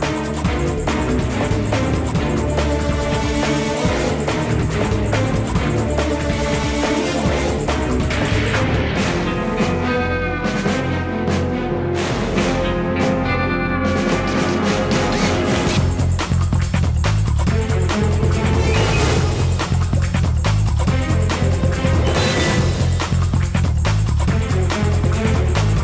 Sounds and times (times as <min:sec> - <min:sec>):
Music: 0:00.0 - 0:25.8.